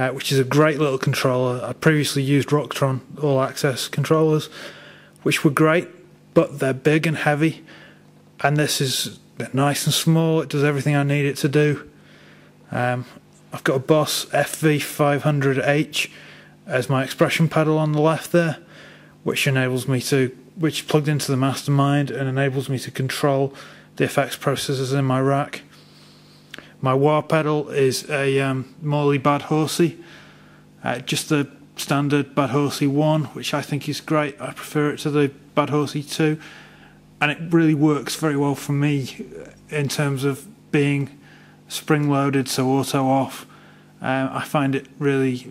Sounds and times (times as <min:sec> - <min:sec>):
Speech: 0:00.0 - 0:04.6, 0:05.2 - 0:07.7, 0:08.4 - 0:12.0, 0:12.7 - 0:25.7, 0:26.8 - 0:30.0, 0:30.8 - 0:36.5, 0:37.2 - 0:45.5.